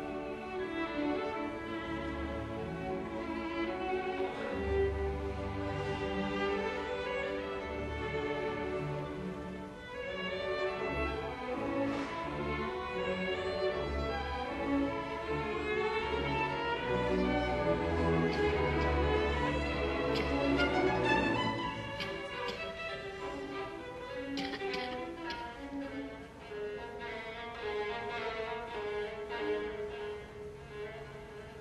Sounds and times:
Violin, fiddle: 0.0s - 31.6s.

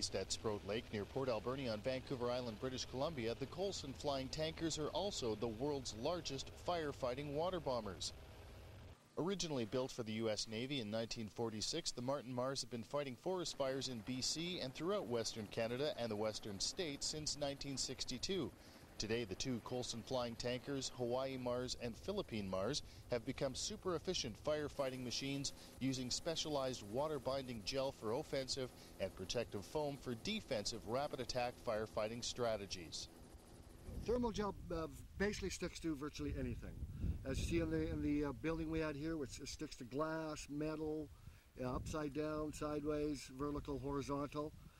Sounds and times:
Speech: 0.0s - 8.2s, 9.2s - 33.1s, 33.9s - 44.6s.

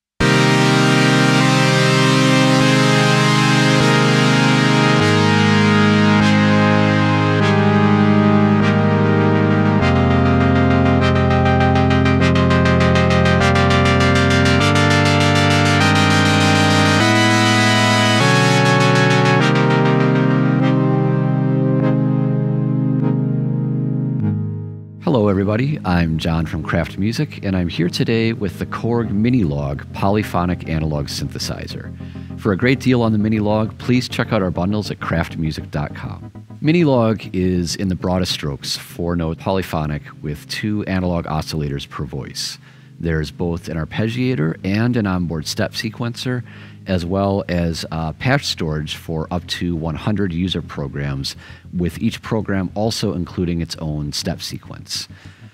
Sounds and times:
Music: 0.2s - 55.5s
Speech: 25.0s - 55.2s.

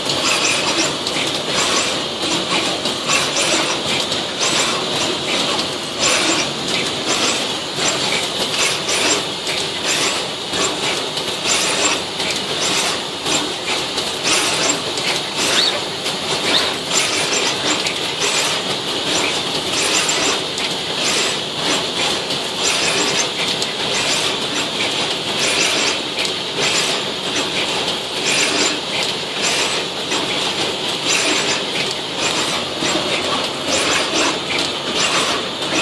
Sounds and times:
Power tool: 0.0s - 35.8s.

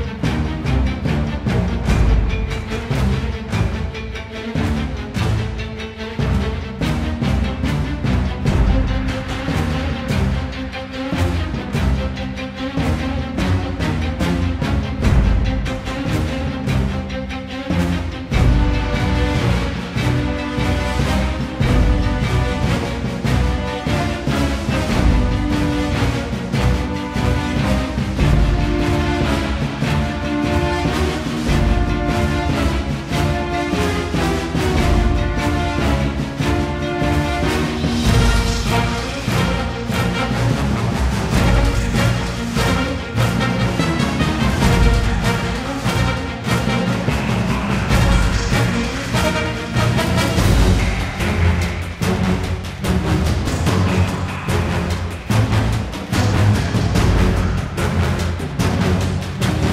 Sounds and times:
Music: 0.0s - 59.7s.

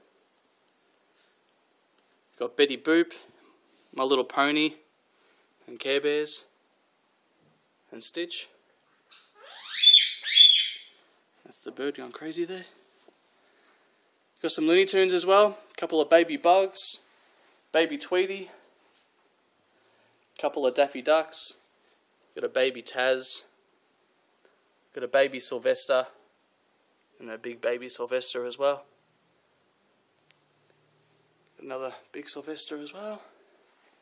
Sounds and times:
Inside, small room: 0.0s - 34.0s
Speech: 2.4s - 3.4s, 4.0s - 4.9s, 5.6s - 6.6s, 7.9s - 8.6s, 11.4s - 12.8s, 14.4s - 17.1s, 17.7s - 18.6s, 20.4s - 21.6s, 22.4s - 23.6s, 24.9s - 26.2s, 27.2s - 29.0s, 31.6s - 33.4s.

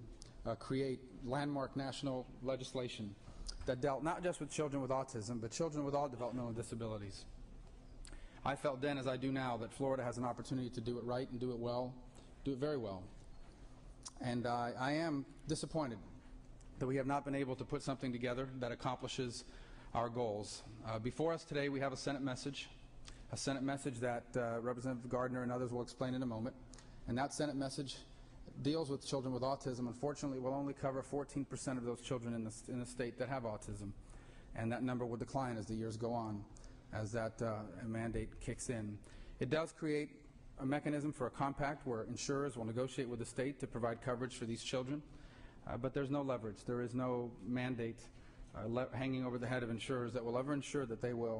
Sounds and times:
Male speech, man speaking: 0.0s - 7.4s, 8.4s - 13.2s, 14.1s - 16.2s, 16.8s - 34.0s, 34.6s - 51.4s
Narration, monologue: 0.0s - 51.4s.

